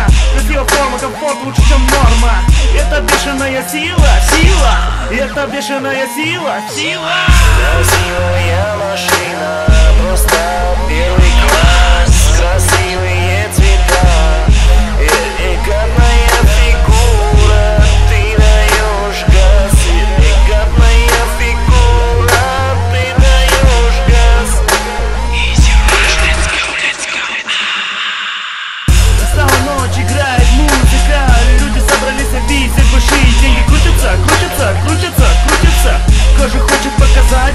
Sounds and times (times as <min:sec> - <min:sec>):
Dubstep: 0:00.0 - 0:37.5.